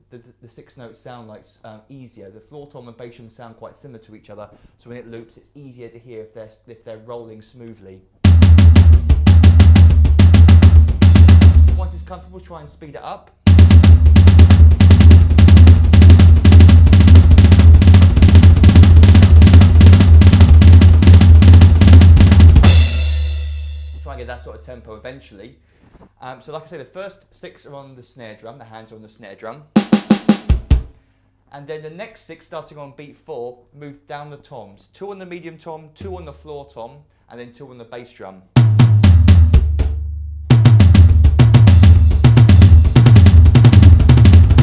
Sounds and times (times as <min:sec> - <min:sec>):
Bass drum: 0:08.2 - 0:12.8, 0:13.5 - 0:24.8, 0:29.8 - 0:31.0, 0:38.6 - 0:44.6
Snare drum: 0:08.3 - 0:12.6, 0:13.5 - 0:24.6, 0:29.8 - 0:31.0, 0:38.6 - 0:44.6.